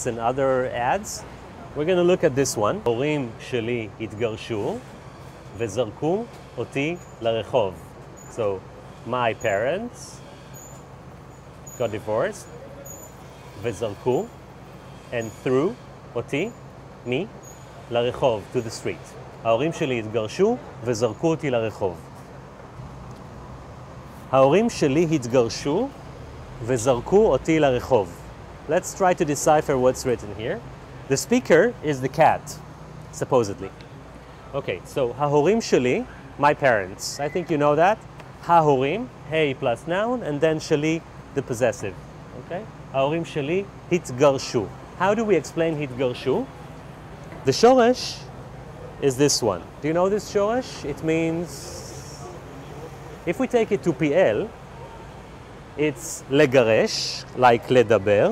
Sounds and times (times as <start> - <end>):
Speech: 0.0 - 4.9, 5.6 - 10.2, 11.8 - 12.7, 13.6 - 14.3, 15.1 - 22.0, 24.3 - 26.0, 26.6 - 33.8, 34.5 - 46.5, 47.4 - 48.3, 49.0 - 52.4, 53.2 - 54.5, 55.8 - 58.3.